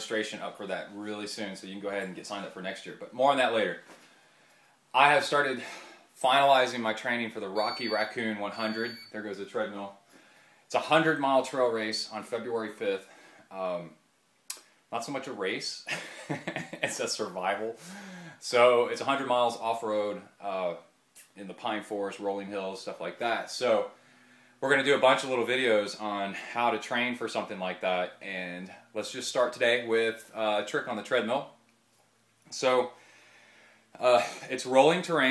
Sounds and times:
Speech: 0:00.0 - 0:03.9, 0:04.9 - 0:10.0, 0:10.7 - 0:14.0, 0:14.9 - 0:15.9, 0:16.8 - 0:17.8, 0:18.4 - 0:24.0, 0:24.6 - 0:31.6, 0:32.5 - 0:33.0, 0:34.0 - 0:35.3
Inside, small room: 0:00.0 - 0:35.3.

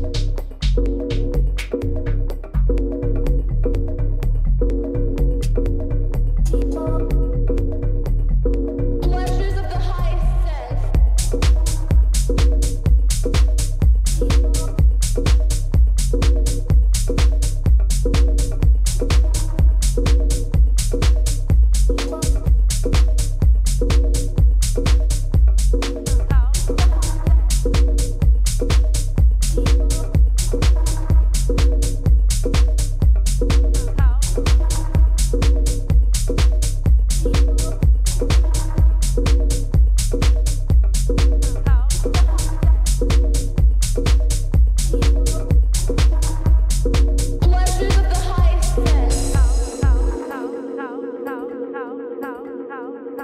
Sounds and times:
Music: 0:00.0 - 0:53.2
Speech: 0:09.0 - 0:10.9, 0:26.2 - 0:27.5, 0:33.8 - 0:34.8, 0:41.5 - 0:42.8, 0:47.4 - 0:51.9.

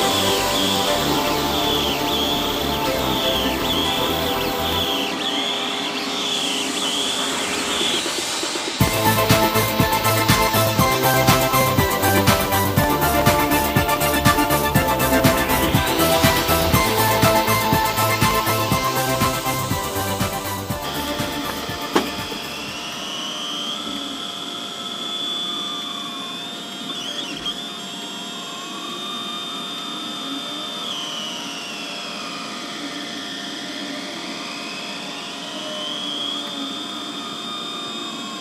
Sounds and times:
Drill: 0:00.0 - 0:38.4.

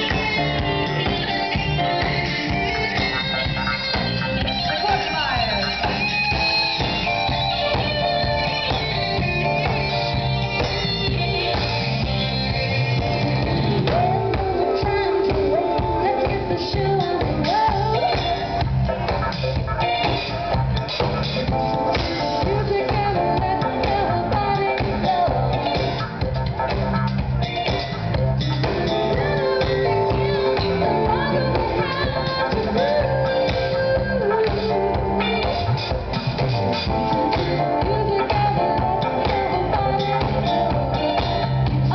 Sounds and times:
Drum: 0:00.0 - 0:41.9
Drum kit: 0:00.0 - 0:41.9.

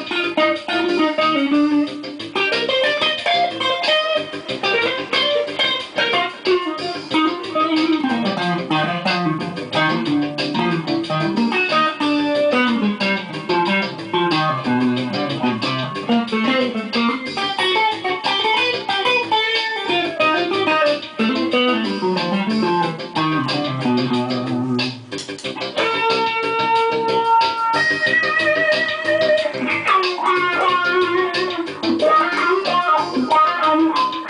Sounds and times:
Electric guitar: 0:00.0 - 0:34.2.

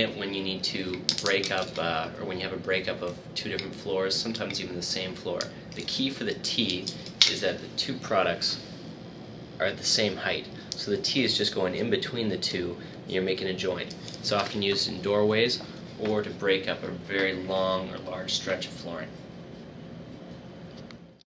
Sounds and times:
Speech: 0:00.0 - 0:08.7, 0:09.6 - 0:19.2.

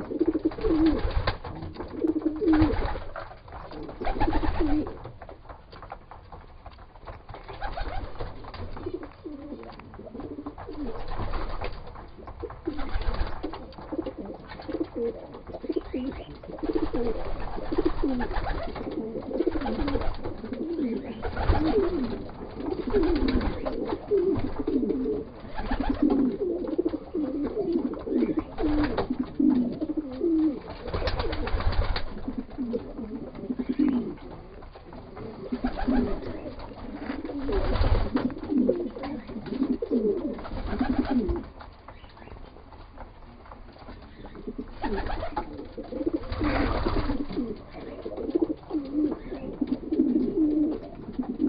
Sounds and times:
Coo: 0:00.0 - 0:05.1, 0:07.7 - 0:11.4, 0:12.2 - 0:41.5, 0:44.0 - 0:51.4.

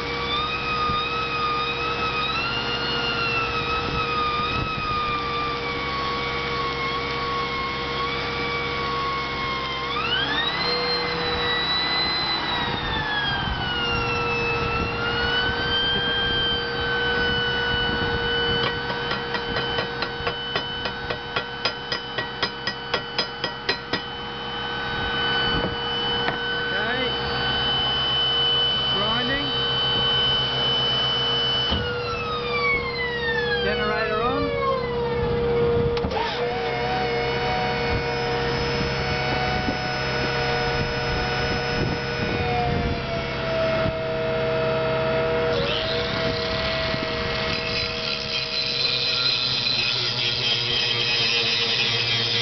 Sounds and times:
Outside, urban or manmade: 0:00.0 - 0:52.4
Ambulance (siren): 0:09.1 - 0:18.8, 0:28.7 - 0:35.8
Speech: 0:26.7 - 0:27.2, 0:29.0 - 0:29.6, 0:33.6 - 0:34.7.

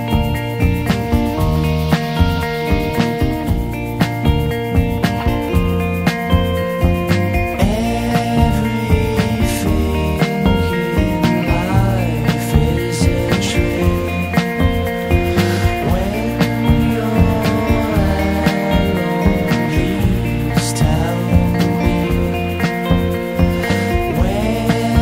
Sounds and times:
Funny music: 0:00.0 - 0:25.0.

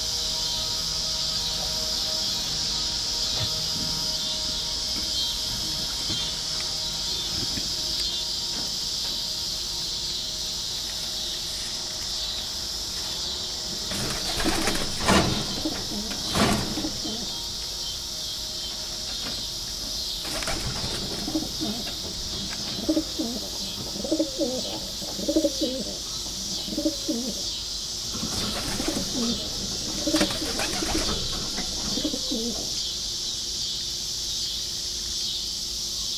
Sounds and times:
Coo: 0:14.2 - 0:17.4, 0:20.5 - 0:22.0, 0:22.7 - 0:27.6, 0:28.2 - 0:32.8.

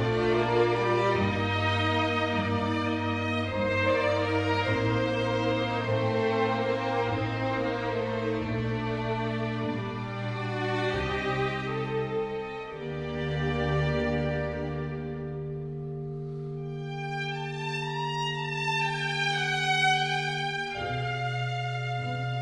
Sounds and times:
Bowed string instrument: 0:00.0 - 0:22.4.

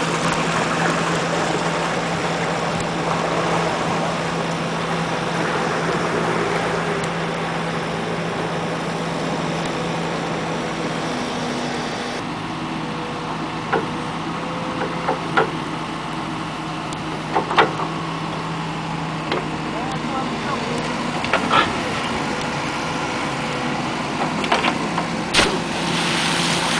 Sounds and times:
Speech: 0:19.7 - 0:21.0.

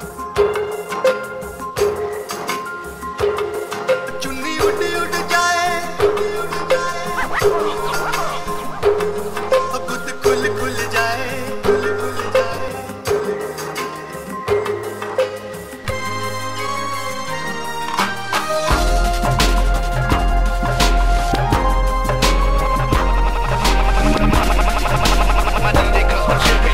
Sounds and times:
Dubstep: 0:04.1 - 0:12.8, 0:22.2 - 0:26.7.

